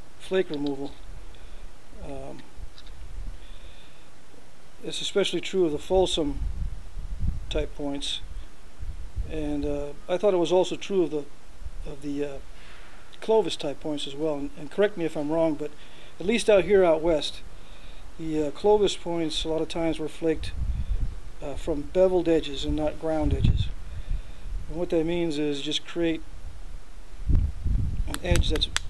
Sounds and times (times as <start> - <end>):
Speech: 0.2 - 1.0, 2.0 - 2.4, 4.8 - 6.4, 7.5 - 8.3, 9.3 - 11.3, 11.9 - 12.4, 13.2 - 17.4, 18.2 - 20.6, 21.4 - 23.8, 24.7 - 26.2, 28.1 - 28.8.